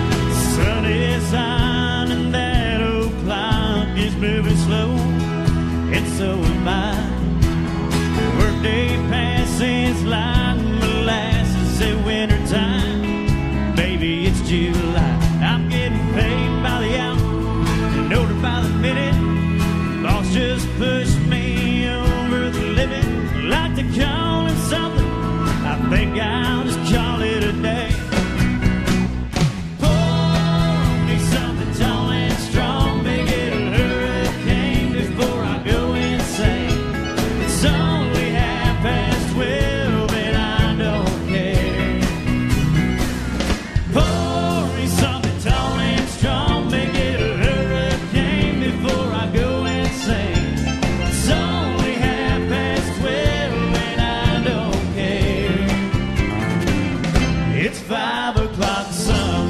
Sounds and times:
Music: 0.0 - 59.5.

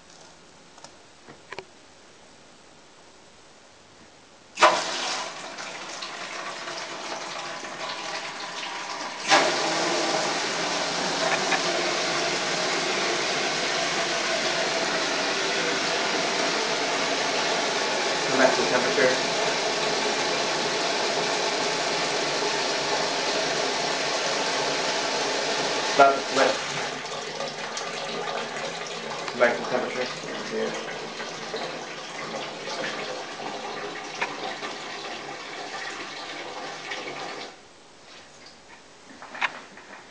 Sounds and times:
Toilet flush: 4.6 - 37.6
Speech: 18.3 - 19.3, 26.0 - 26.6, 29.3 - 30.9.

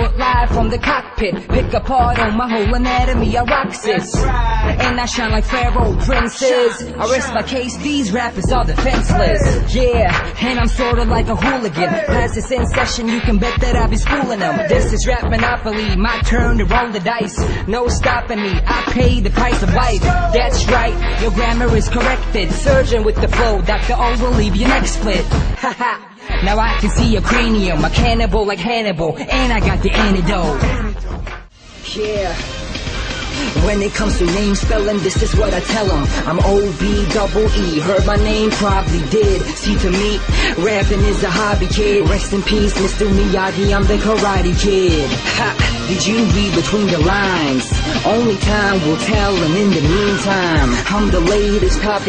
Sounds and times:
Music: 0.0 - 52.0.

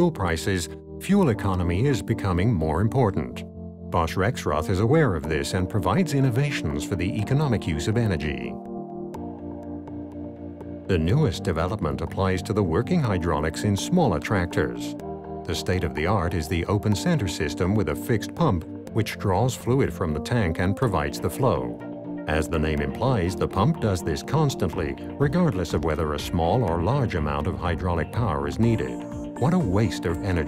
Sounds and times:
Speech: 0.0 - 3.4, 4.0 - 8.6, 10.9 - 30.4
Music: 0.0 - 30.4.

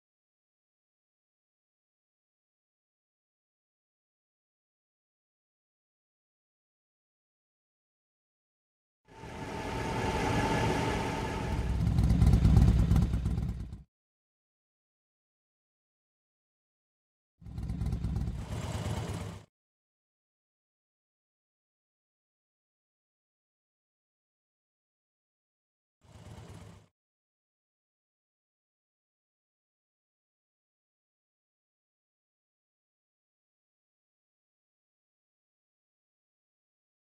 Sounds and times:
Vehicle: 9.1 - 13.9, 17.4 - 19.5, 26.0 - 26.9.

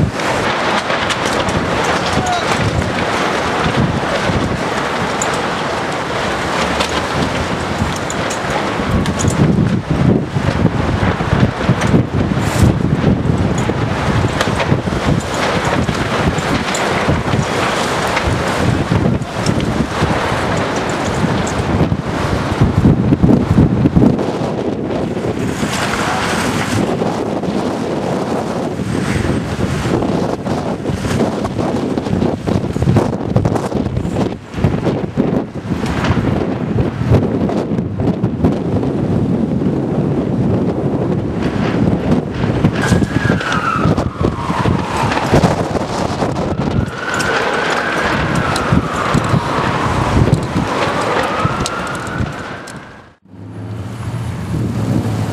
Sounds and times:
Wind noise (microphone): 0.0 - 55.3.

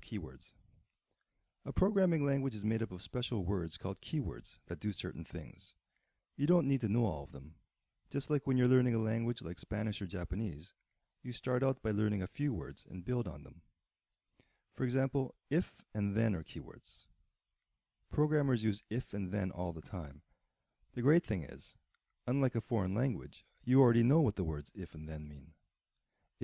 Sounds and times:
Speech: 0.0 - 0.6, 1.6 - 5.8, 6.4 - 13.6, 14.8 - 17.1, 18.1 - 20.3, 20.9 - 25.6.

